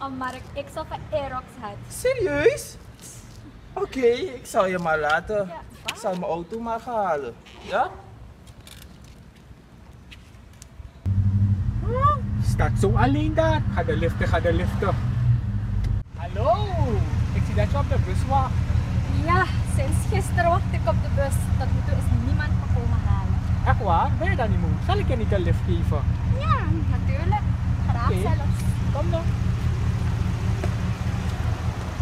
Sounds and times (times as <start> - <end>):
Car: 11.0 - 32.0.